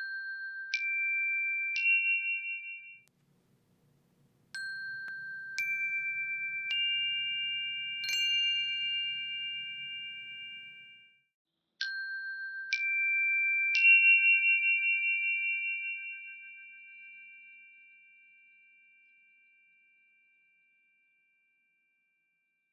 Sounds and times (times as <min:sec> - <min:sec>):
Chime: 0:00.0 - 0:03.1, 0:04.6 - 0:22.2.